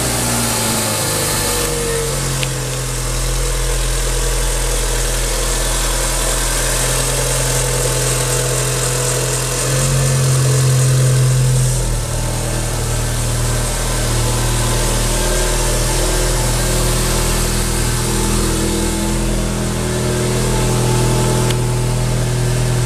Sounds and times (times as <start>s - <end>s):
Car: 0.0s - 22.8s
Medium engine (mid frequency): 0.0s - 22.8s.